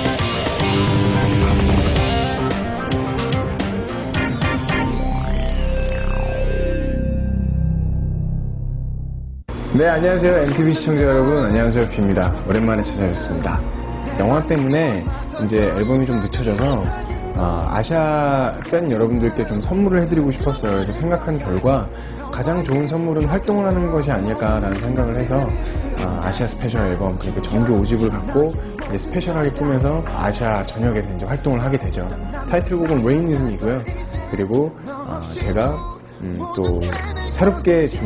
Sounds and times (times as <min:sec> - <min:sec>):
Music: 0:00.0 - 0:38.0
Speech: 0:09.7 - 0:13.6, 0:14.2 - 0:38.0.